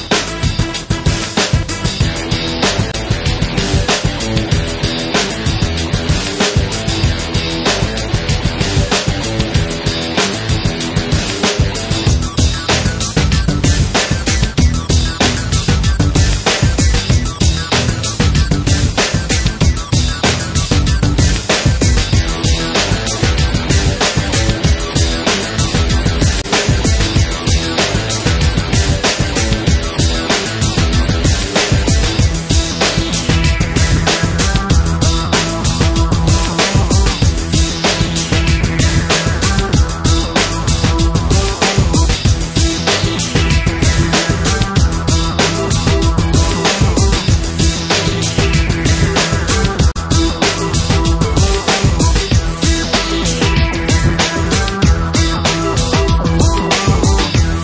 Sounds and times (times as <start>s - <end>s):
Music: 0.0s - 57.6s.